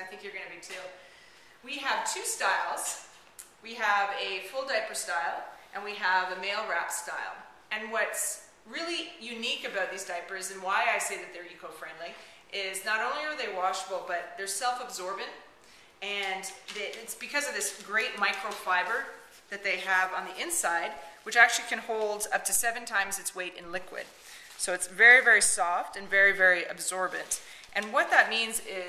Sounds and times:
Speech: 0:00.0 - 0:01.0, 0:01.6 - 0:28.8.

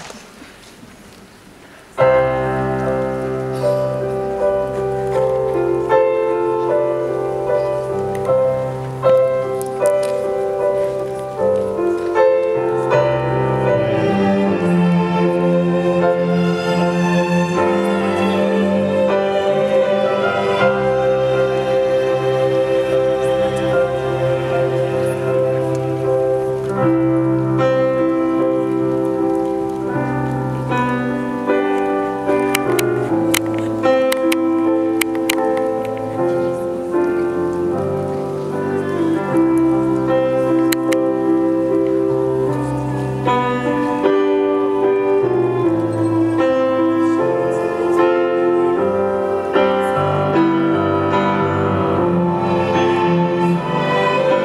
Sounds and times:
Music: 0:02.0 - 0:54.4.

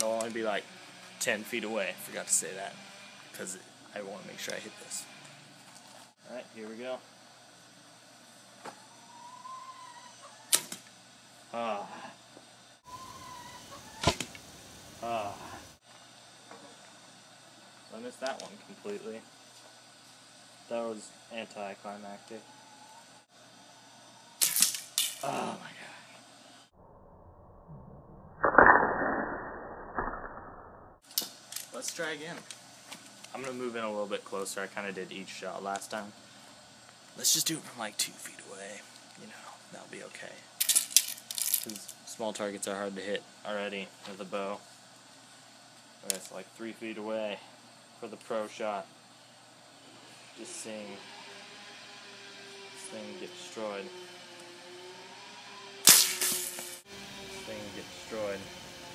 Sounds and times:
Speech: 0:00.0 - 0:00.6, 0:01.2 - 0:02.8, 0:03.4 - 0:05.1, 0:06.2 - 0:07.0, 0:11.5 - 0:12.2, 0:17.9 - 0:19.2, 0:20.7 - 0:22.5, 0:31.7 - 0:32.4, 0:33.3 - 0:36.2, 0:37.2 - 0:40.5, 0:41.7 - 0:44.6, 0:46.0 - 0:48.9, 0:50.4 - 0:51.0, 0:52.8 - 0:53.9, 0:57.3 - 0:58.5.

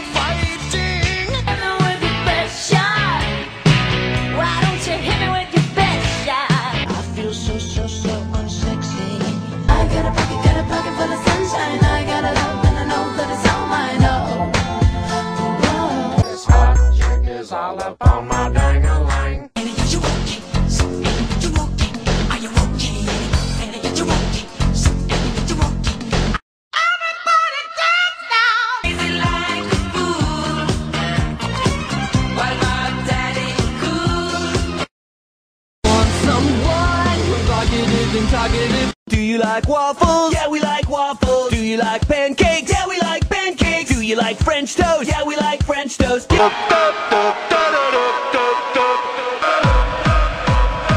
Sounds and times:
Music: 0:00.0 - 0:34.9, 0:35.8 - 0:50.9.

